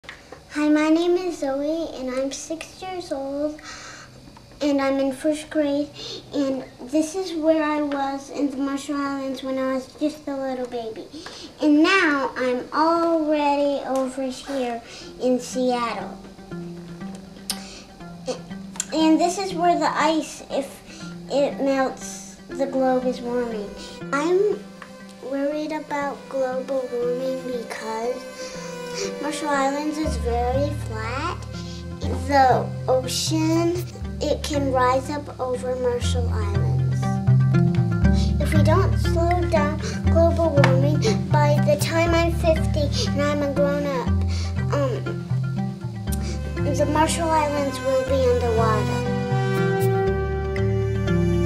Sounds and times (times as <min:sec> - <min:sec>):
Speech: 0:00.5 - 0:03.6, 0:04.6 - 0:16.2, 0:18.3 - 0:24.6, 0:25.2 - 0:28.3, 0:29.1 - 0:31.4, 0:32.0 - 0:37.1, 0:38.2 - 0:44.1, 0:46.6 - 0:49.0.